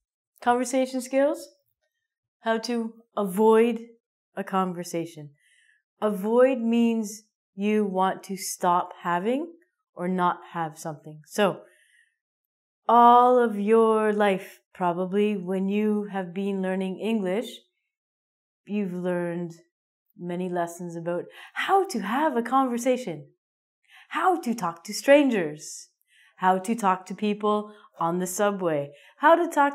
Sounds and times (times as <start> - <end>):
Speech: 0.4 - 1.5, 2.5 - 3.8, 4.4 - 5.3, 6.0 - 11.6, 12.9 - 17.6, 18.7 - 19.6, 20.2 - 23.2, 24.1 - 25.8, 26.4 - 29.7.